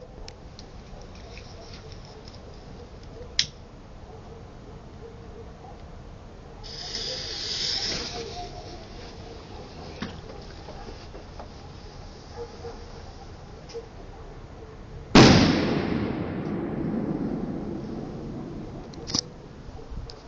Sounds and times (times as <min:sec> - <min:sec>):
Firecracker: 0:06.6 - 0:09.5, 0:15.2 - 0:19.2.